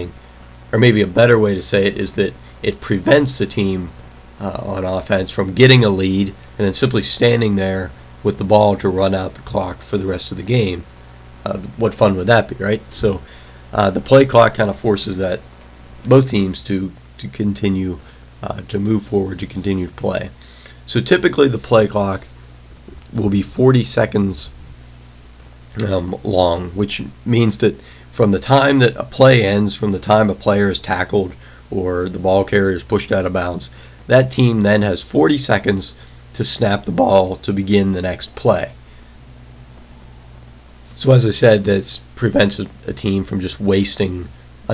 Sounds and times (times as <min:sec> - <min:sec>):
Speech: 0:00.0 - 0:22.3, 0:23.1 - 0:24.6, 0:25.7 - 0:38.8, 0:41.0 - 0:44.7.